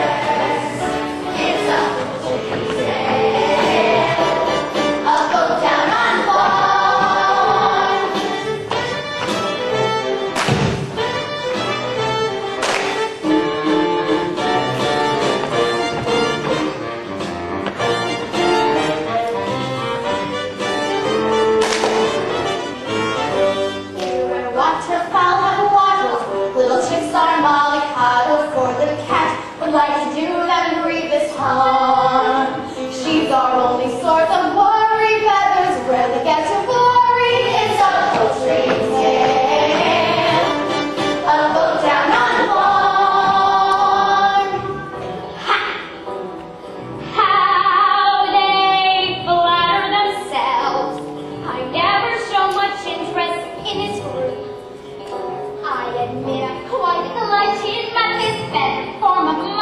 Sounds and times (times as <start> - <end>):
Music: 0.0 - 59.6.